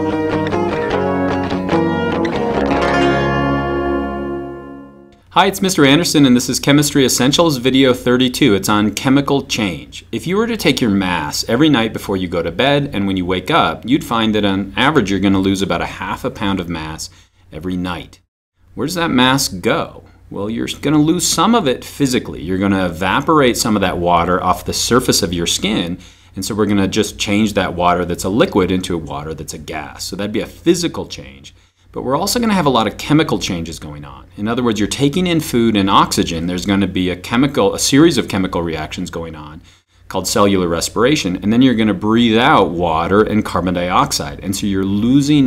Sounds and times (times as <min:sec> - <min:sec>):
Narration, monologue: 0:05.2 - 0:45.4.